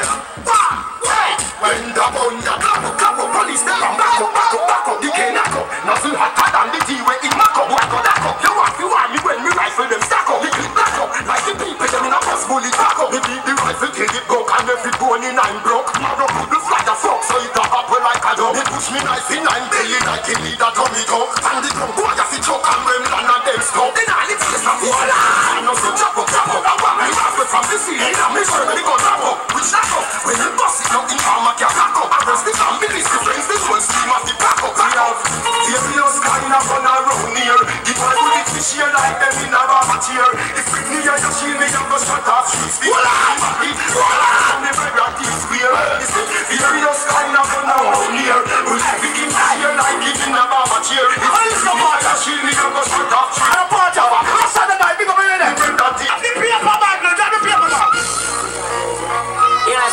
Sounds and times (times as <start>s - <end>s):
Music: 0.0s - 59.9s.